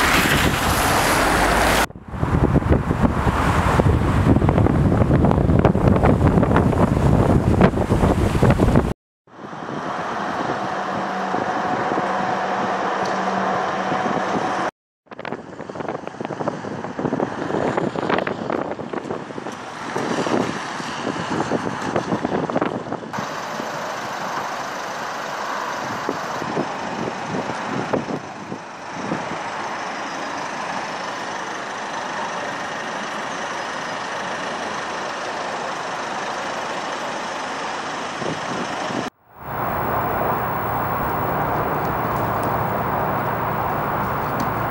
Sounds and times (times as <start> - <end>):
Car: 0.0 - 8.8, 9.4 - 44.7.